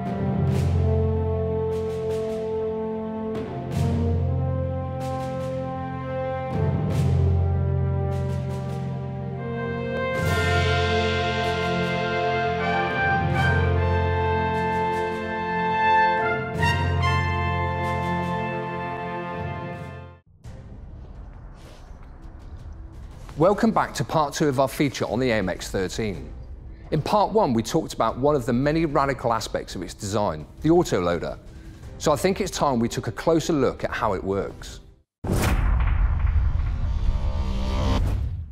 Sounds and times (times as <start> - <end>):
Music: 0.0 - 35.2, 36.6 - 38.5.